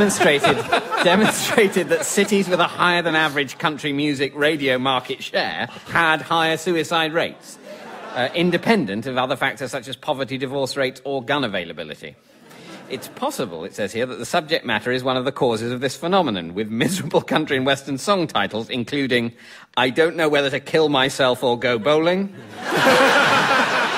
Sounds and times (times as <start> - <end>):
Speech: 0.0 - 12.2, 12.9 - 22.4.